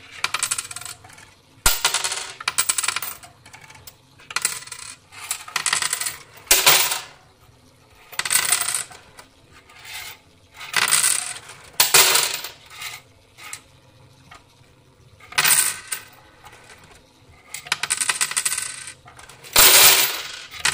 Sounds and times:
Coin (dropping): 0.1 - 7.2, 8.0 - 13.7, 15.2 - 20.7.

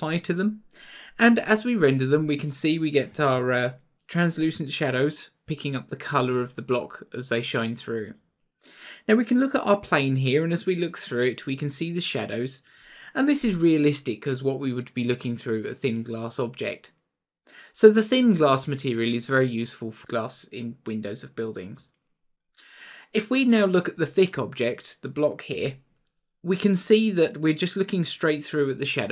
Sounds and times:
Speech: 0.0 - 8.2, 9.0 - 16.9, 17.6 - 21.9, 23.0 - 25.8, 26.5 - 29.1.

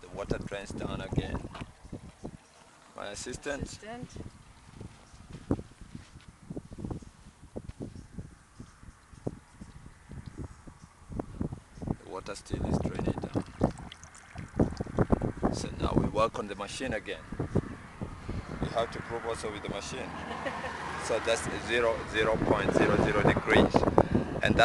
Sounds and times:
Outside, rural or natural: 0.0 - 24.6.

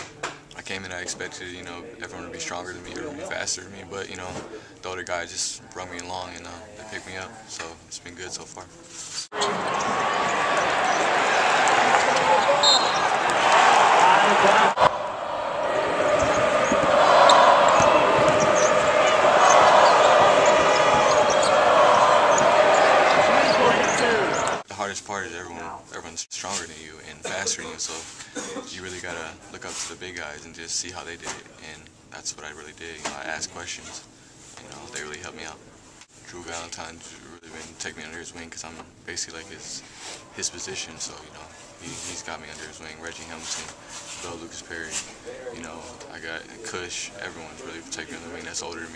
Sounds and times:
Speech: 0.6 - 9.0, 23.6 - 35.6, 36.2 - 48.9.

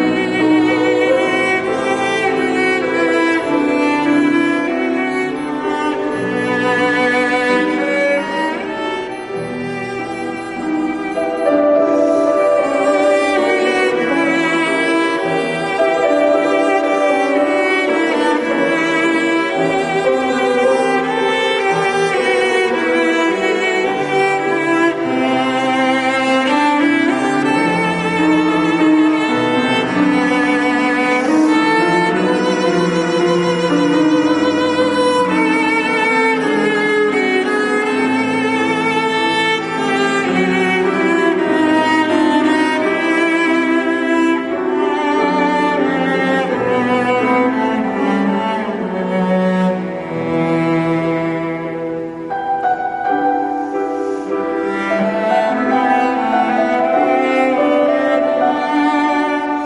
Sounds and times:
Cello: 0.0 - 59.6.

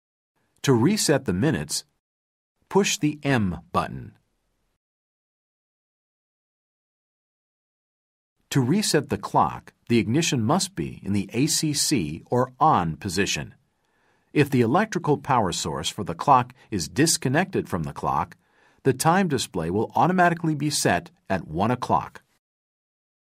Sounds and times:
Speech: 0.6 - 1.9, 2.7 - 4.2, 8.5 - 13.6, 14.4 - 22.4.

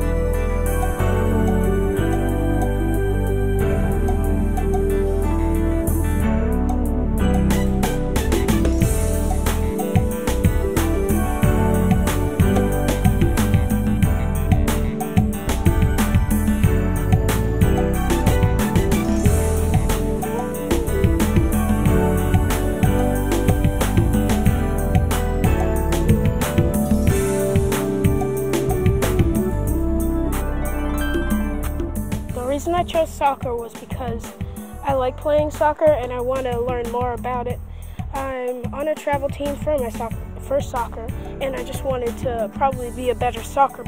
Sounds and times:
Music: 0.0 - 43.8
Speech: 32.3 - 43.8.

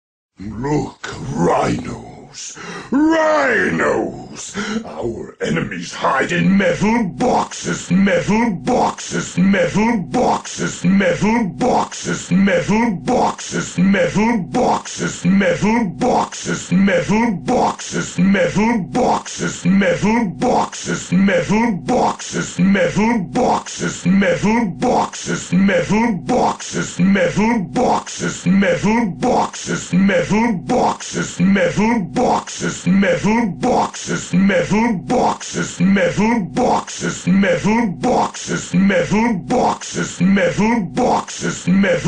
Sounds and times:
Speech: 0.4 - 42.0.

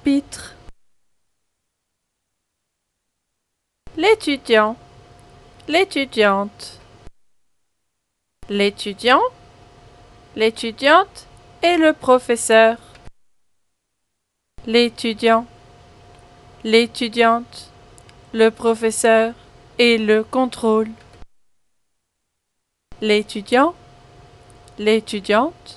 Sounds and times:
Speech: 0.0 - 0.6, 3.9 - 4.8, 5.6 - 6.8, 8.4 - 9.4, 10.4 - 12.9, 14.6 - 15.5, 16.6 - 21.0, 23.0 - 23.8, 24.8 - 25.7.

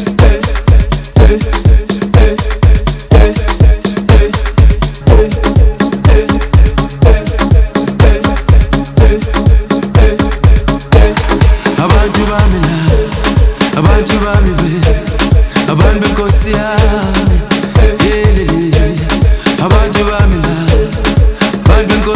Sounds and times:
Music: 0.0 - 22.1.

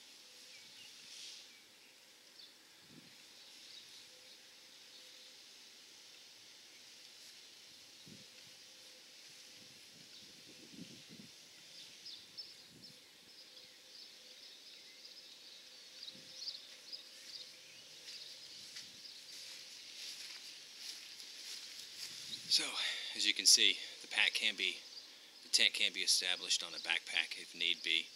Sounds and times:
Environmental noise: 0.0 - 28.1.

